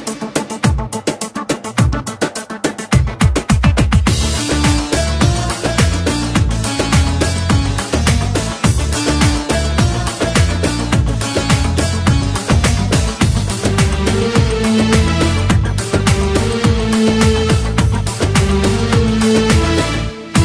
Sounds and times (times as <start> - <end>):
Music: 0.0 - 20.4.